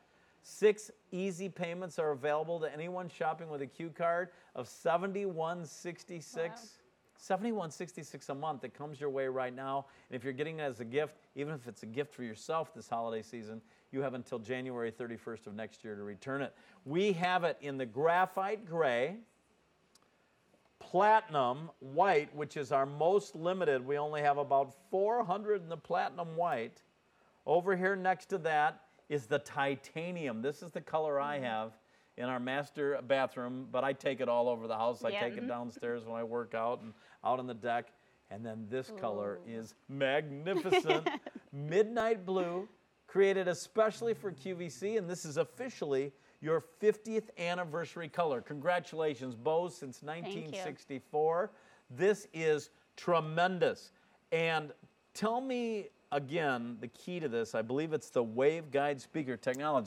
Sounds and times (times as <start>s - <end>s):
Speech: 0.4s - 19.3s, 20.8s - 26.8s, 27.5s - 59.8s.